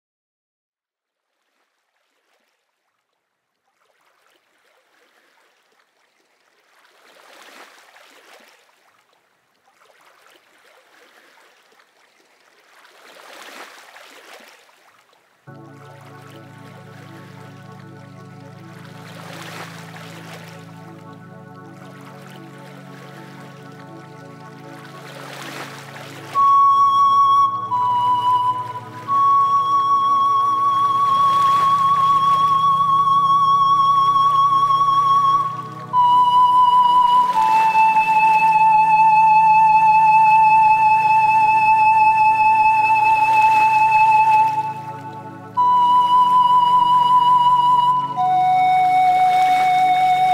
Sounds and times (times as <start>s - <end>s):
Flute: 15.5s - 50.3s.